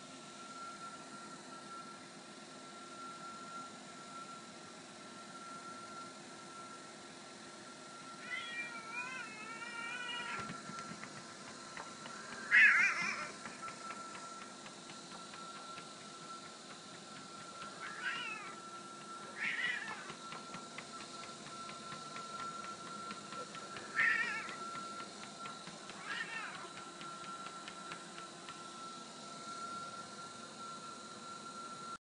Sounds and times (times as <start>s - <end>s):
Meow: 8.2s - 10.4s, 12.5s - 13.3s, 17.8s - 18.5s, 19.4s - 20.1s, 24.0s - 24.5s, 26.0s - 26.7s.